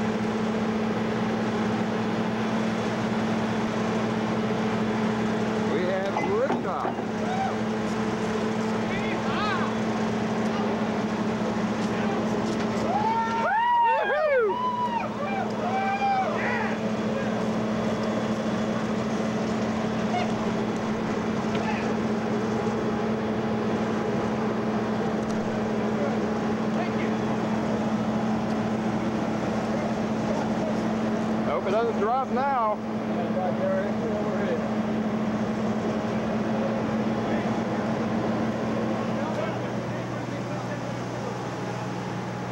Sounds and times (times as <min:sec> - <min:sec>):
Vehicle: 0:00.0 - 0:42.5
Speech: 0:05.7 - 0:07.4, 0:25.9 - 0:27.2, 0:29.6 - 0:34.7, 0:39.1 - 0:41.4.